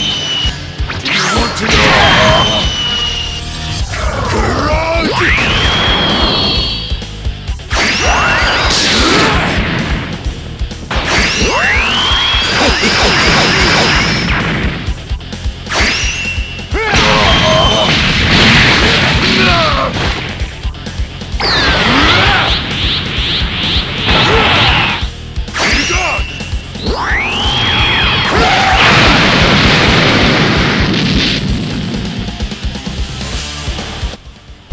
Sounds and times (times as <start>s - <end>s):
Music: 0.0s - 34.7s
Speech: 1.1s - 2.2s, 19.2s - 19.9s.